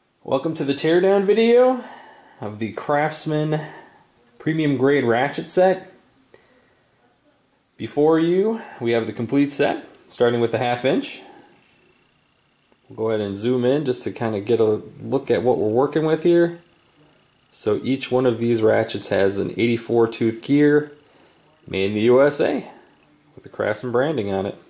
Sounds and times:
Speech: 0.2s - 11.6s, 12.9s - 24.7s.

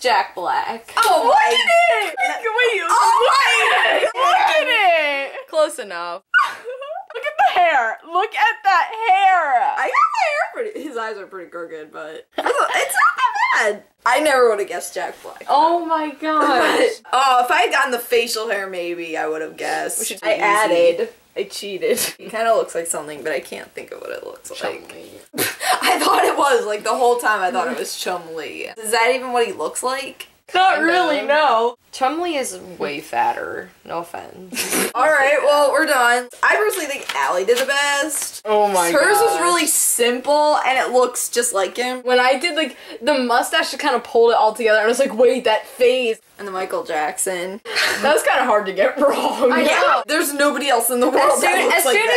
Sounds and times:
Inside, small room: 0.0s - 52.1s
Speech: 7.1s - 52.1s.

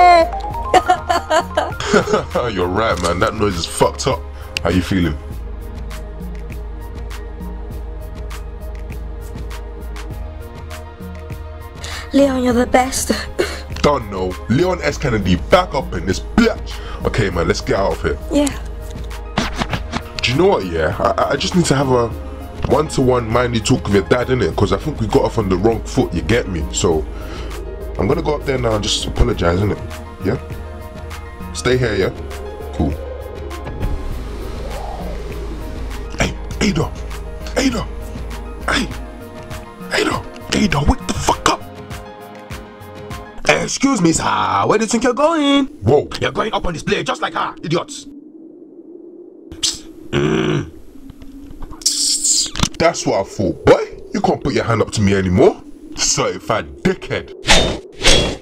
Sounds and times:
Speech: 0.0s - 0.3s, 2.0s - 5.2s, 11.9s - 18.6s, 20.2s - 27.0s, 28.0s - 30.4s, 31.6s - 32.2s, 32.8s - 33.0s, 36.2s - 37.9s, 38.7s - 39.0s, 39.9s - 41.7s, 43.4s - 48.1s, 49.6s - 50.7s, 51.8s - 57.3s
Music: 0.0s - 47.9s.

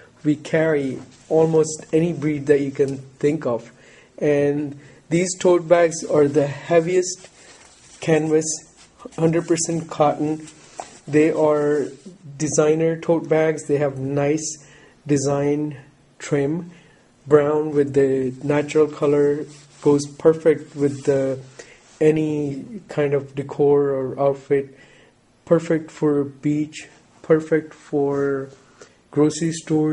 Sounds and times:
Speech: 0.0s - 7.3s, 8.0s - 24.8s, 25.4s - 29.9s.

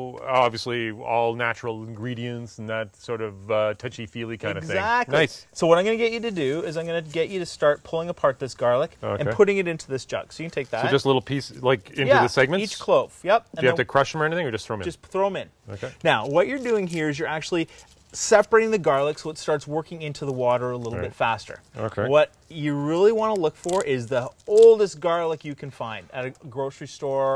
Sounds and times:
Speech: 0.0s - 17.6s, 18.2s - 27.3s.

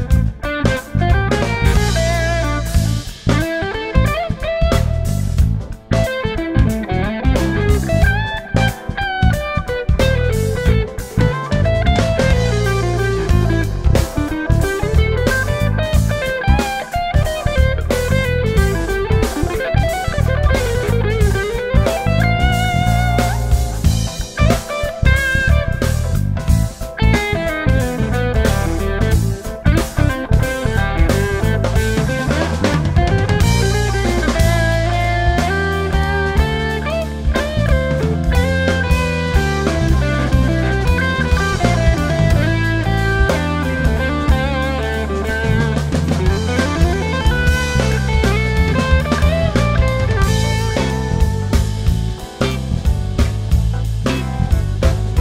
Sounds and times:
Bass drum: 0.0s - 55.2s
Drum kit: 0.0s - 55.2s
Hi-hat: 0.0s - 55.2s
Jazz: 0.0s - 55.2s
Steel guitar, slide guitar: 0.0s - 55.2s.

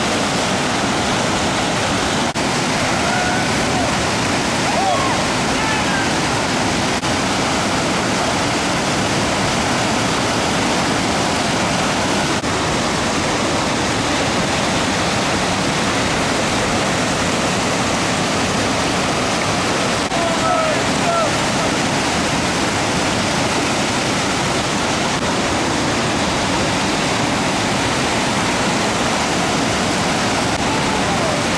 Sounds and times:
Waterfall: 0.0s - 31.5s.

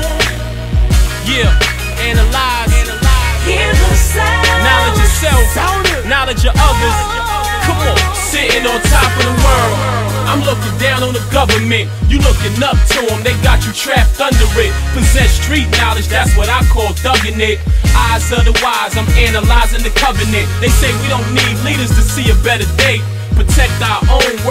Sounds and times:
Hip hop music: 0.0s - 24.5s.

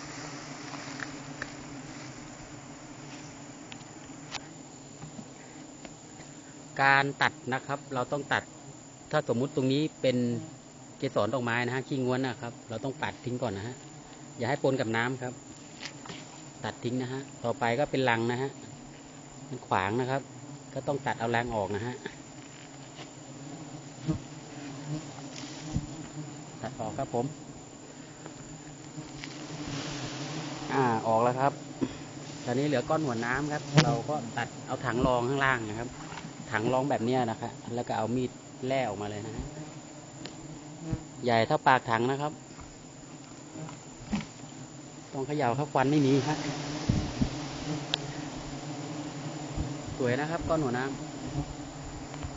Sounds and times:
Bee, wasp, etc.: 0.0s - 52.3s
Fly, housefly: 0.0s - 52.3s.

